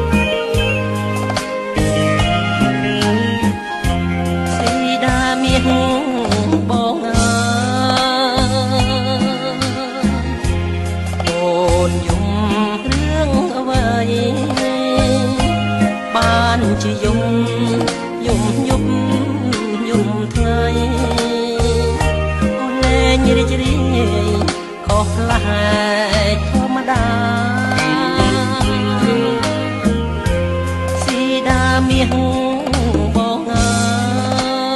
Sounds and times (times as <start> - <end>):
Music: 0.0 - 34.7.